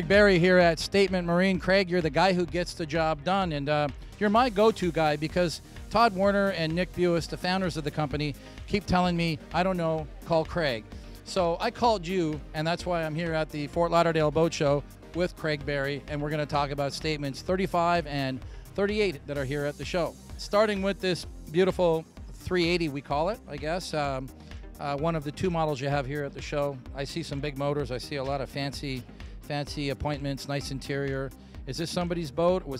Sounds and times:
Music: 0:00.0 - 0:32.7
Speech: 0:00.0 - 0:32.7.

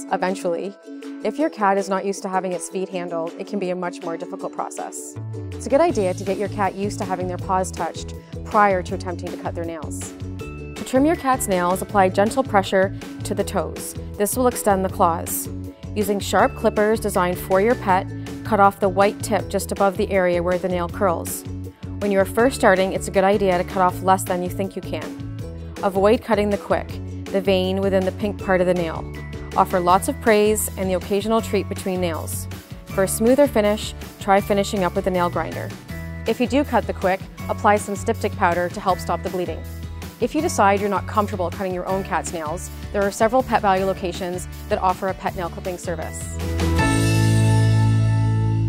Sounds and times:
Speech: 0:00.0 - 0:10.1, 0:10.8 - 0:21.4, 0:22.0 - 0:25.1, 0:25.8 - 0:35.7, 0:36.3 - 0:39.6, 0:40.2 - 0:46.4
Music: 0:00.0 - 0:48.6.

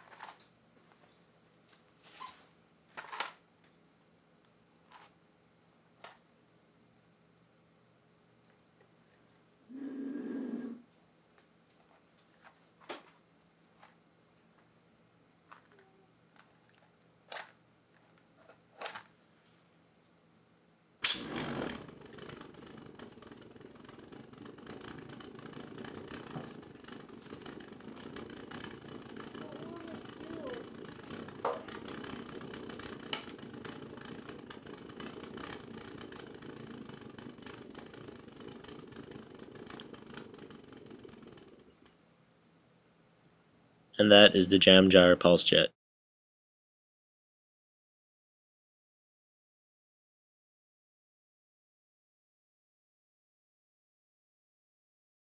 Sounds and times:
Speech: 0:29.4 - 0:30.6, 0:44.0 - 0:45.8.

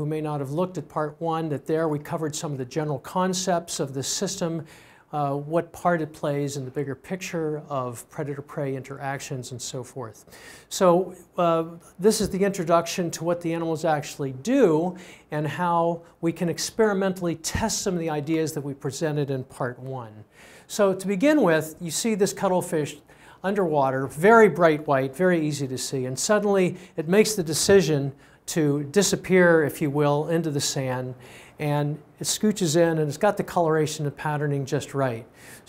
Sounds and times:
Speech: 0:00.0 - 0:35.6.

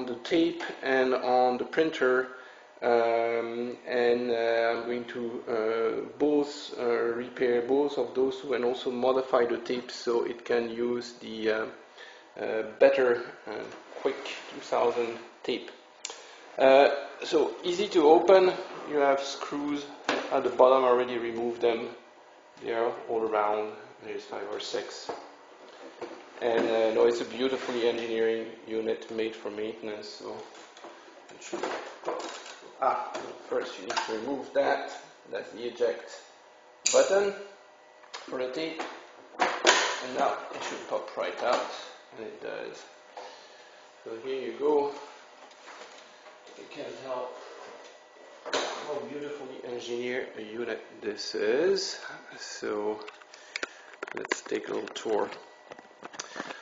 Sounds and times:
Speech: 0:00.0 - 0:11.8, 0:12.4 - 0:15.8, 0:16.6 - 0:25.2, 0:26.4 - 0:30.5, 0:31.3 - 0:37.6, 0:38.2 - 0:39.0, 0:39.8 - 0:43.0, 0:44.0 - 0:45.2, 0:46.5 - 0:47.6, 0:48.6 - 0:53.1, 0:54.1 - 0:55.4.

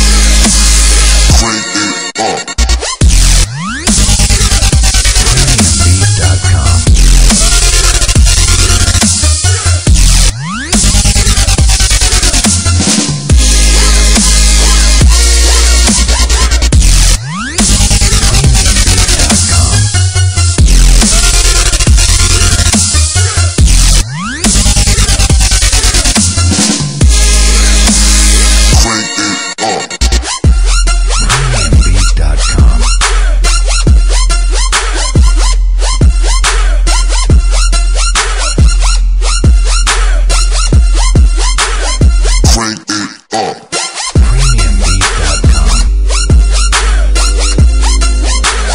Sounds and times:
Drum and bass: 0:00.0 - 0:01.8, 0:02.6 - 0:29.4, 0:30.0 - 0:42.7, 0:44.0 - 0:48.7.

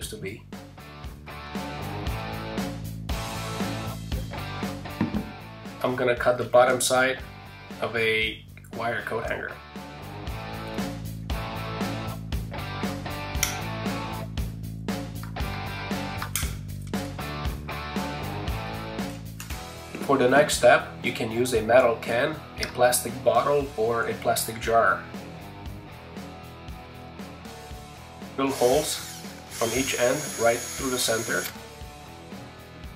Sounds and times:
Speech: 0:00.0 - 0:00.4, 0:05.8 - 0:07.2, 0:07.8 - 0:09.6, 0:20.0 - 0:25.0, 0:28.4 - 0:29.0, 0:29.6 - 0:31.5
Music: 0:00.0 - 0:32.9.

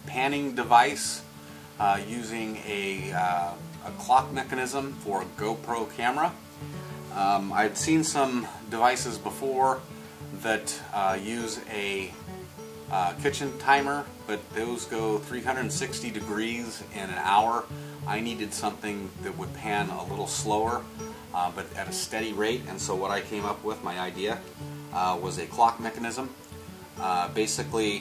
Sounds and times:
Speech: 0:00.0 - 0:06.4, 0:07.1 - 0:09.8, 0:10.4 - 0:12.2, 0:12.9 - 0:26.4, 0:27.0 - 0:28.0
Music: 0:00.0 - 0:28.0.

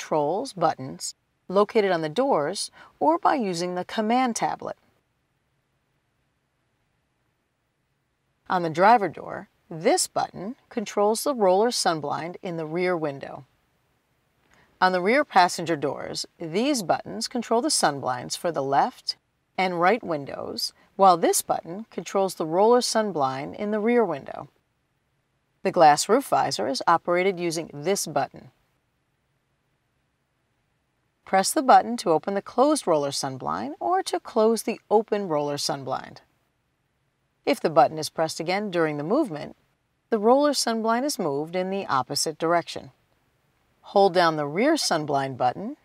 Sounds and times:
Speech: 0:00.0 - 0:04.8, 0:08.5 - 0:13.5, 0:14.8 - 0:24.5, 0:25.7 - 0:28.5, 0:31.3 - 0:36.3, 0:37.5 - 0:39.6, 0:40.2 - 0:43.0, 0:43.9 - 0:45.8.

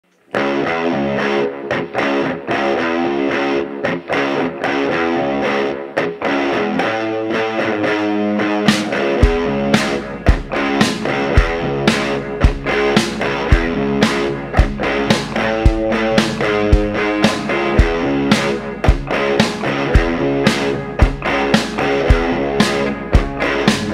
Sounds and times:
Music: 0:00.1 - 0:23.9.

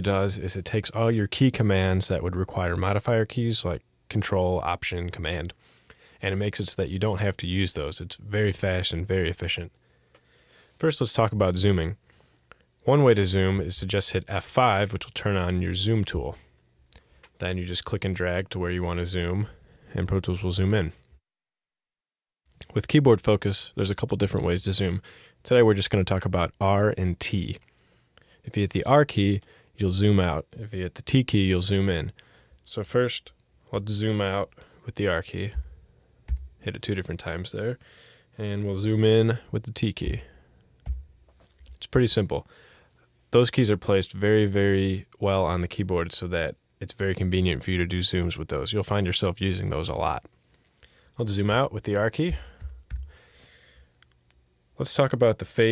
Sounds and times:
Speech: 0:00.0 - 0:05.6, 0:06.2 - 0:09.8, 0:10.8 - 0:12.0, 0:12.8 - 0:16.5, 0:17.4 - 0:21.1, 0:22.6 - 0:27.6, 0:28.4 - 0:35.7, 0:36.6 - 0:37.8, 0:38.4 - 0:40.4, 0:41.6 - 0:42.5, 0:43.3 - 0:50.3, 0:51.2 - 0:52.6, 0:54.8 - 0:55.7.

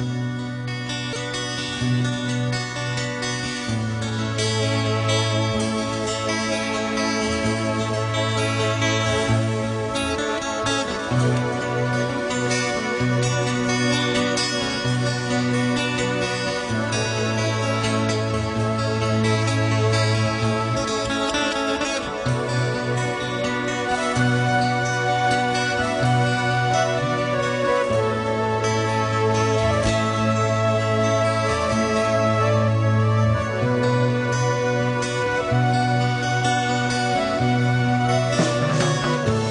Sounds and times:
Music: 0:00.0 - 0:39.5.

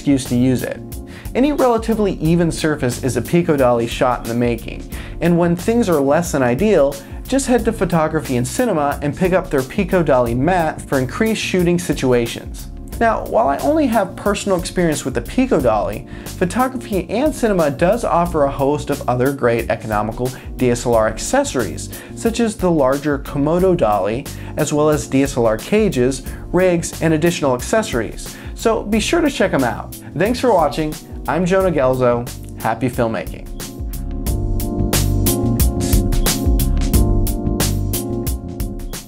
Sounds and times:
Speech: 0:00.0 - 0:33.5
Music: 0:00.0 - 0:39.0.

